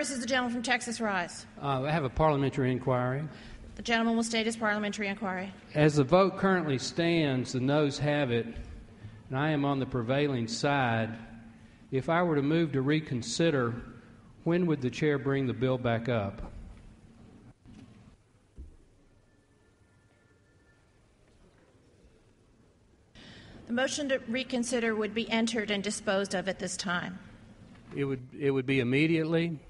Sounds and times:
Speech: 0:14.5 - 0:16.5, 0:27.9 - 0:29.6.

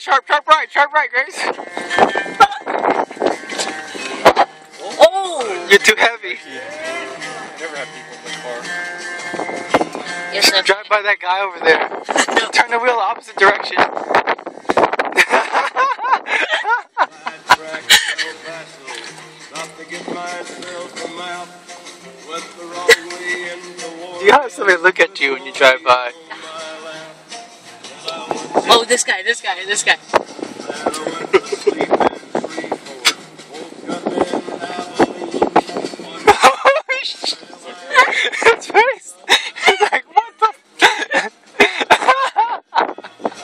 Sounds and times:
Music: 0:01.3 - 0:43.4.

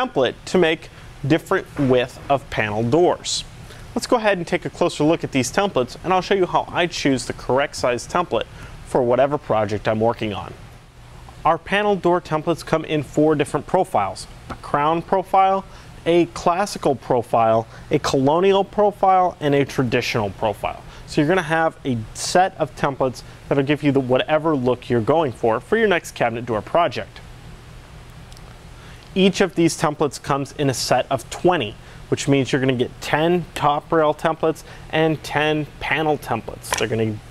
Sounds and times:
Speech: 0:00.0 - 0:10.6, 0:11.4 - 0:27.2, 0:29.1 - 0:37.2.

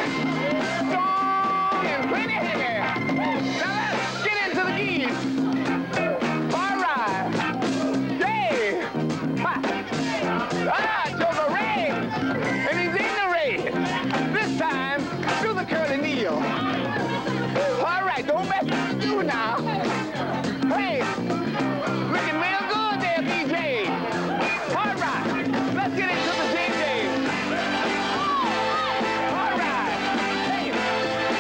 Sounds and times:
Music: 0:00.0 - 0:31.4
Speech: 0:00.4 - 0:05.2, 0:06.0 - 0:07.4, 0:08.1 - 0:21.2, 0:22.0 - 0:24.0, 0:24.7 - 0:27.2.

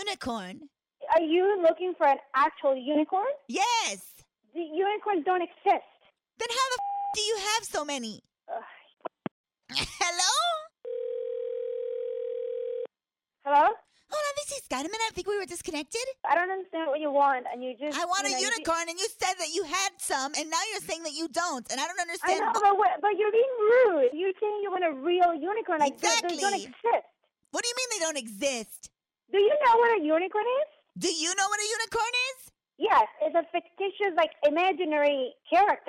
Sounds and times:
Speech: 0:03.5 - 0:05.3, 0:09.7 - 0:10.7, 0:13.5 - 0:26.9, 0:27.6 - 0:35.8
Dial tone: 0:10.8 - 0:12.9.

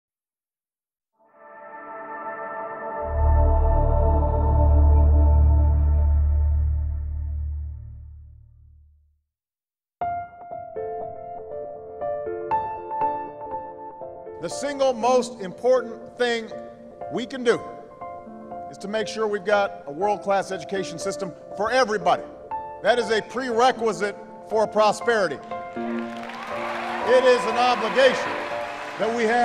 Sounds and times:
Ambient music: 0:01.2 - 0:09.0, 0:10.0 - 0:29.4.

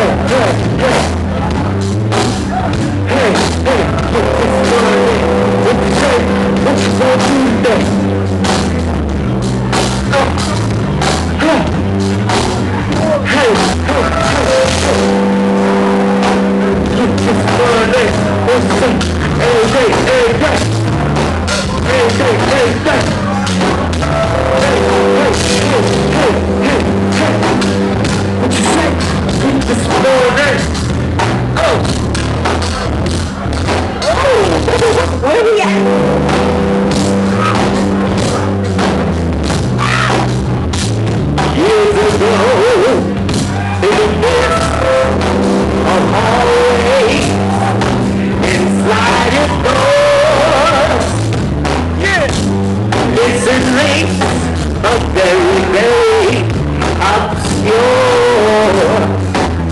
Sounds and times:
Music: 0:00.0 - 0:59.7.

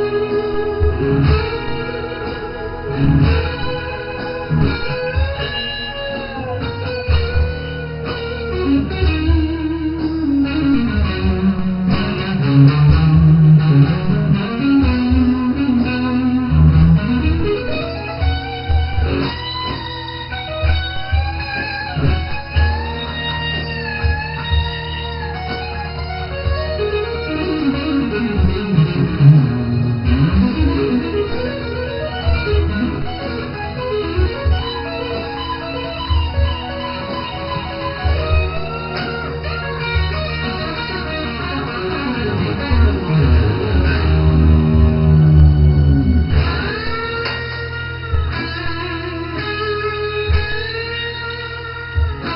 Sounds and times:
Electric guitar: 0:00.0 - 0:52.3.

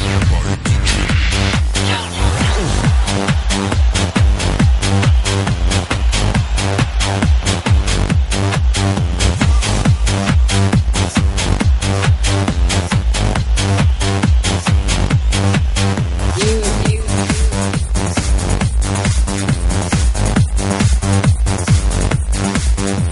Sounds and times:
Techno: 0:00.0 - 0:23.1.

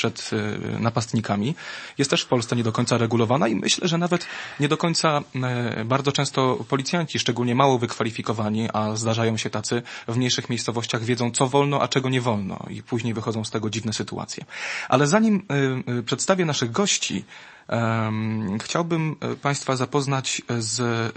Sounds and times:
Speech: 0:00.0 - 0:21.1.

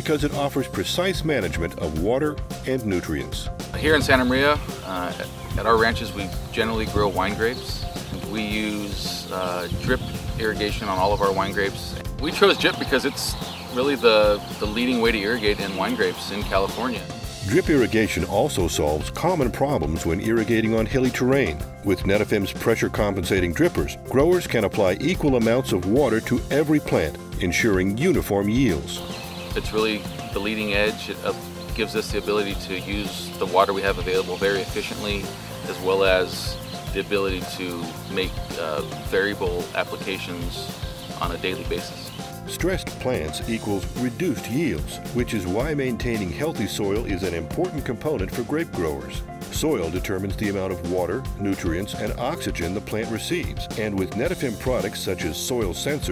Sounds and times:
Music: 0:00.0 - 0:56.1
Speech: 0:00.0 - 0:56.1.

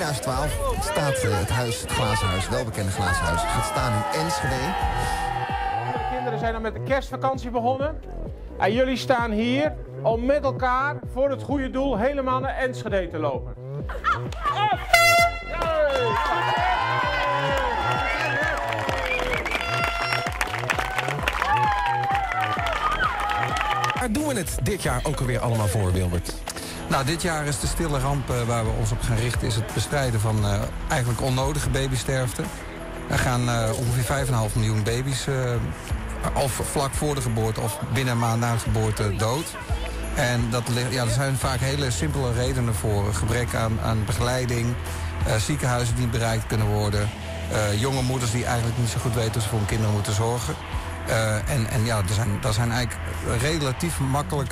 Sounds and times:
Music: 0:00.0 - 0:54.5
Run: 0:14.3 - 0:24.1.

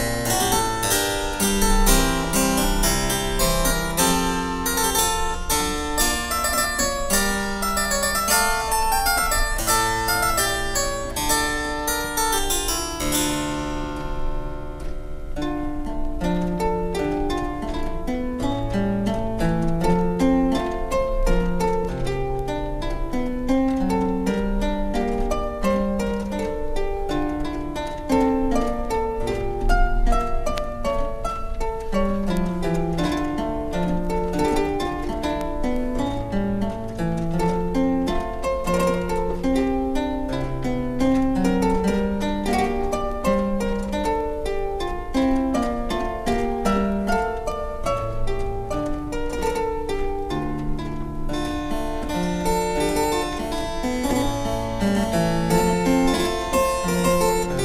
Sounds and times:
Pizzicato: 0:00.0 - 0:57.6.

